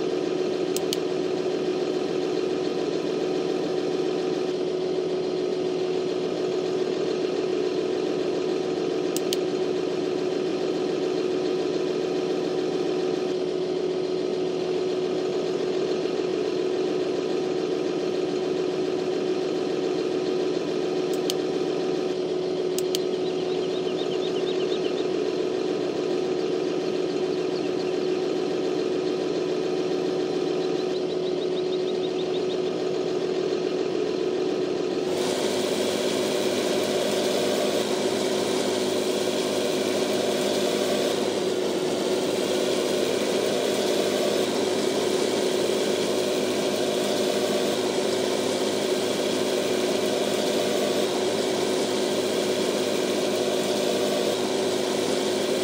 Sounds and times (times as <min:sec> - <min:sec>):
Medium engine (mid frequency): 0:00.0 - 0:55.6
Vehicle: 0:00.0 - 0:55.6.